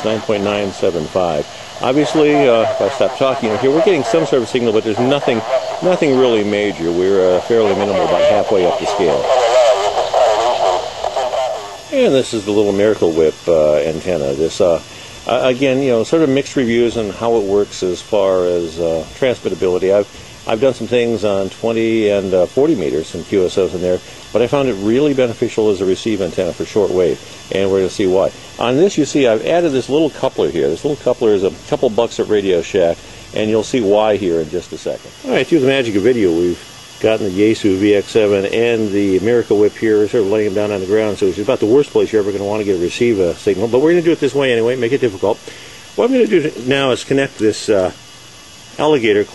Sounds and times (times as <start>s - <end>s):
Radio: 0.0s - 45.4s
Speech: 0.0s - 45.4s, 46.0s - 48.0s, 48.8s - 49.3s.